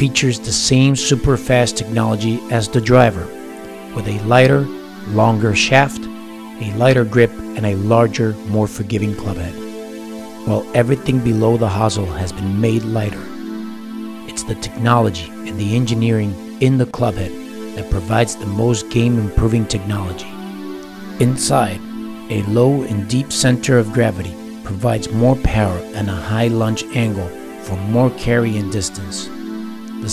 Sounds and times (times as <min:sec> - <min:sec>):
Speech: 0:00.0 - 0:03.3, 0:04.0 - 0:09.6, 0:10.5 - 0:13.3, 0:14.3 - 0:20.3, 0:21.2 - 0:29.3
Music: 0:00.0 - 0:30.1.